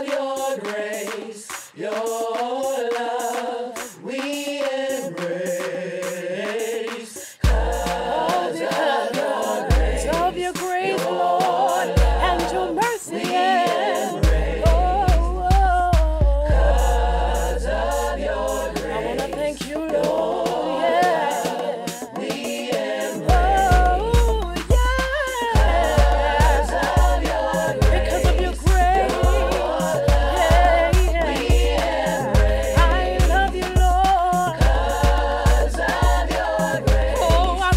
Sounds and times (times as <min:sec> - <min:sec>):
Afrobeat: 0:00.0 - 0:37.7
Singing: 0:00.0 - 0:37.7.